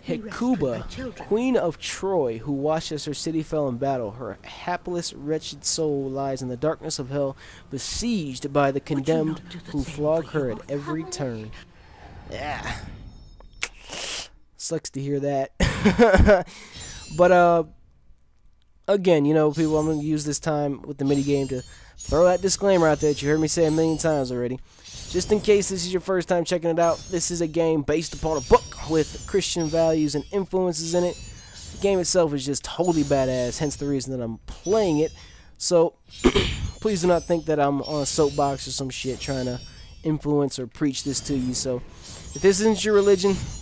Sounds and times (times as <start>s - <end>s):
Speech: 0.0s - 11.6s, 14.6s - 15.6s, 18.9s - 24.6s, 25.2s - 31.2s, 31.8s - 35.9s, 36.8s - 41.8s, 42.4s - 43.5s.